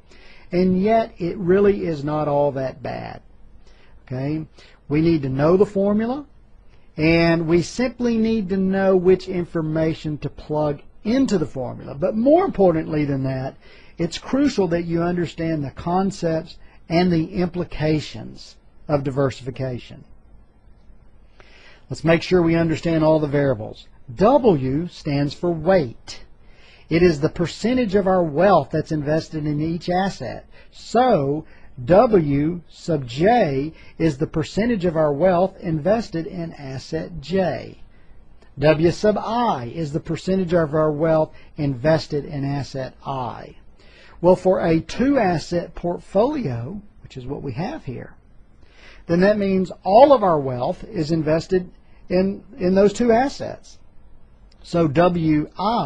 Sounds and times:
Speech: 0.5s - 3.3s, 4.0s - 6.3s, 7.0s - 20.1s, 21.9s - 26.3s, 26.9s - 37.9s, 38.6s - 43.6s, 44.2s - 48.2s, 49.1s - 53.8s, 54.6s - 55.8s.

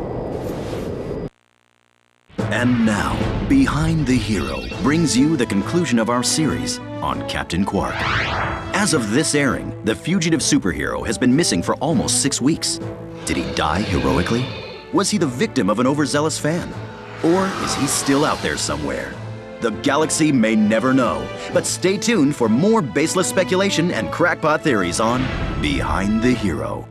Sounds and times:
Music: 2.3s - 26.9s
Speech: 2.5s - 8.1s, 8.7s - 26.9s.

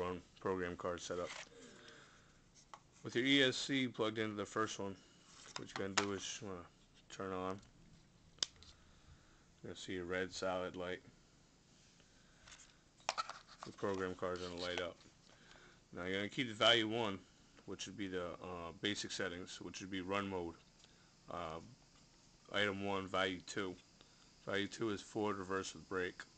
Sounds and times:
Speech: 0.0s - 1.4s, 3.0s - 5.0s, 5.6s - 7.7s, 9.6s - 11.1s, 13.6s - 15.0s, 15.9s - 20.6s, 21.3s - 21.8s, 22.5s - 23.8s, 24.4s - 26.3s
Inside, small room: 0.0s - 26.3s.

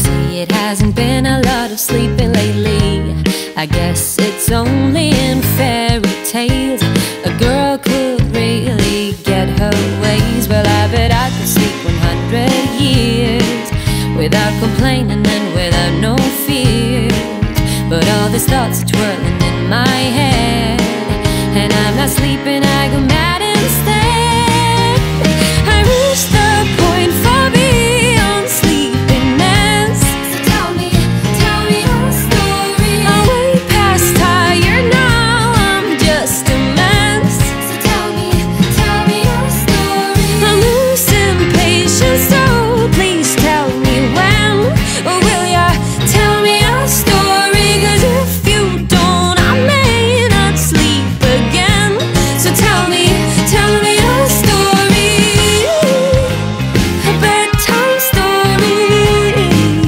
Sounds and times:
Music: 0.0s - 59.8s.

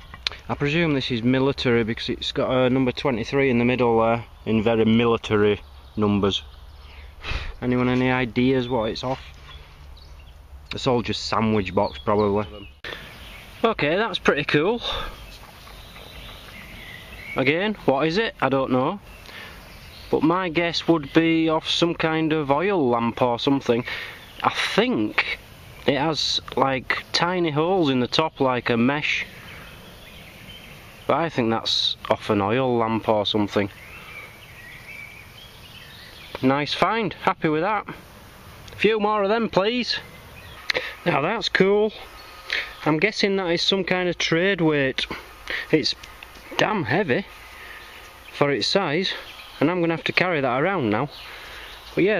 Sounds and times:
Outside, rural or natural: 0.0s - 52.1s
Speech: 0.3s - 6.5s, 7.6s - 9.3s, 10.7s - 12.7s, 13.6s - 15.2s, 17.4s - 19.0s, 20.1s - 29.3s, 31.1s - 33.8s, 36.3s - 38.0s, 38.8s - 40.1s, 41.0s - 42.1s, 42.7s - 47.3s, 48.3s - 51.2s, 52.0s - 52.1s.

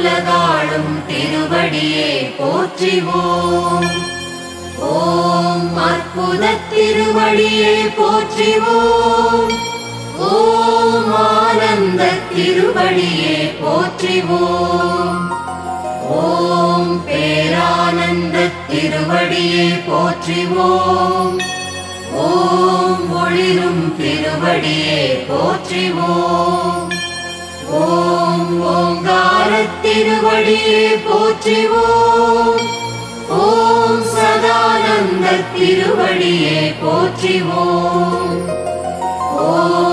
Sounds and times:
Mantra: 0.0s - 4.2s, 4.8s - 15.3s, 16.0s - 21.5s, 22.1s - 27.0s, 27.6s - 38.5s, 39.3s - 39.9s.

